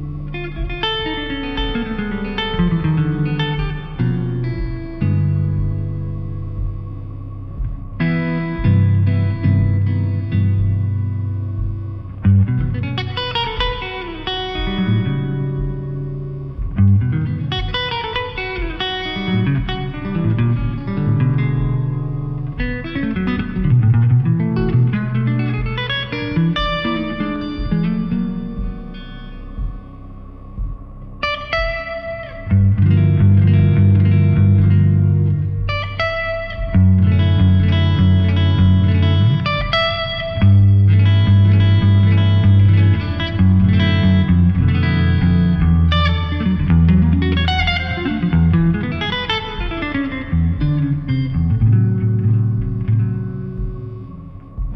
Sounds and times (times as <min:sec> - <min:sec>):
Acoustic guitar: 0:00.0 - 0:54.7
Strum: 0:00.0 - 0:54.7.